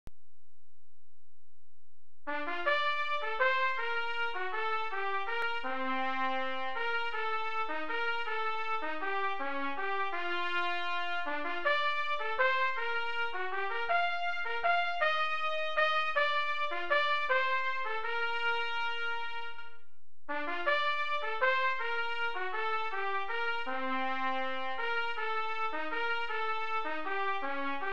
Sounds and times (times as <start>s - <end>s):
Trombone: 2.3s - 27.9s
Trumpet: 2.3s - 27.9s.